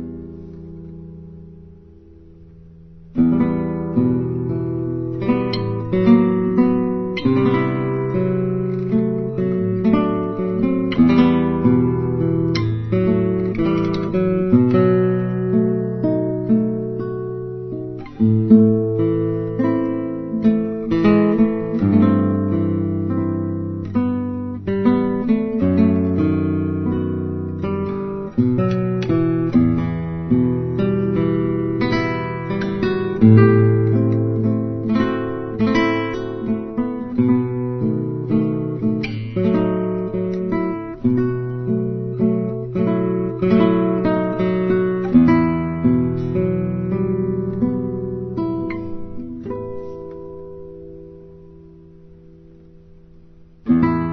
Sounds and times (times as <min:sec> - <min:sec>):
Electric guitar: 0:00.0 - 0:54.1
Strum: 0:00.0 - 0:54.1.